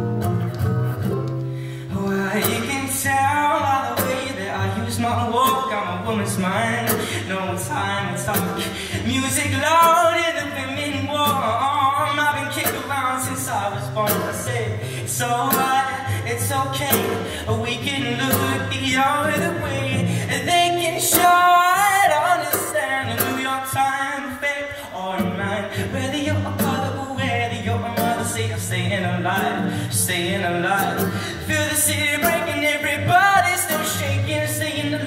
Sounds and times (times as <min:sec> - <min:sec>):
Music: 0:00.0 - 0:35.0
Male singing: 0:01.9 - 0:35.0.